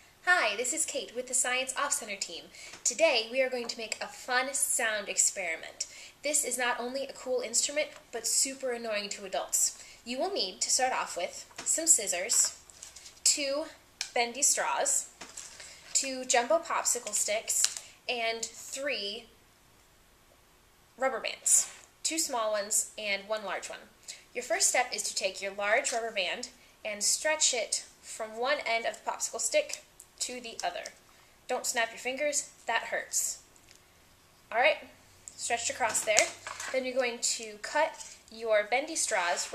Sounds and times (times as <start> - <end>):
Speech: 0.3 - 12.6, 13.3 - 15.1, 16.0 - 19.3, 21.0 - 33.4, 34.5 - 39.5.